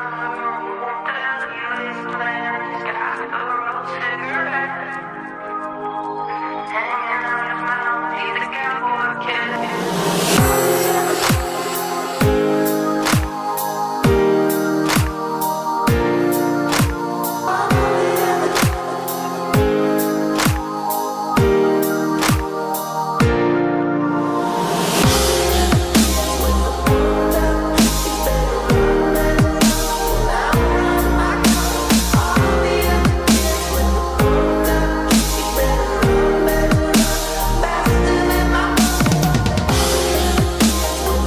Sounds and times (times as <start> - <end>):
Music: 0.0 - 41.2.